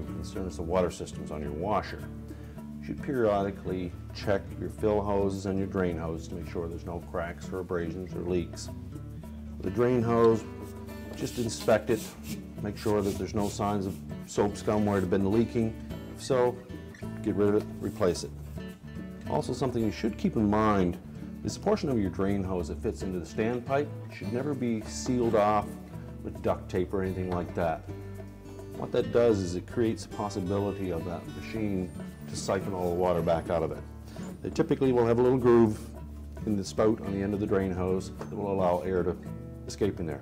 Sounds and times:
Speech: 0.0 - 2.1, 2.8 - 8.7, 9.6 - 10.5, 11.2 - 16.6, 17.2 - 18.3, 19.3 - 27.9, 28.8 - 33.8, 34.4 - 40.2
Music: 0.0 - 40.2.

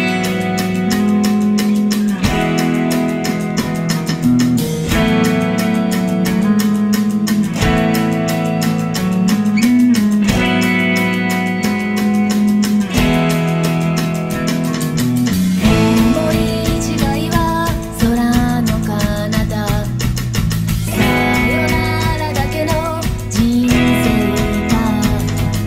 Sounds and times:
Strum: 0.0 - 25.6.

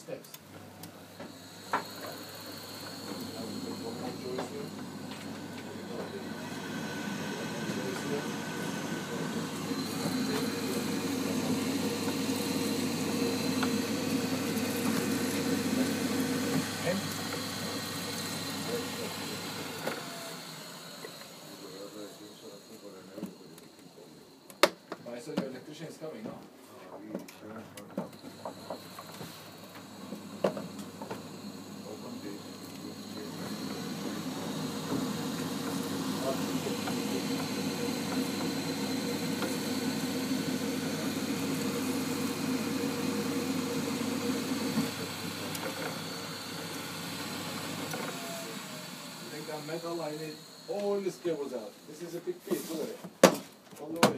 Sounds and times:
Speech: 0.0 - 0.4, 3.2 - 4.7, 7.3 - 8.4, 16.8 - 17.2, 18.6 - 19.2, 21.5 - 24.2, 25.0 - 28.0, 31.8 - 33.8, 36.2 - 37.2, 49.2 - 53.1, 53.8 - 54.1.

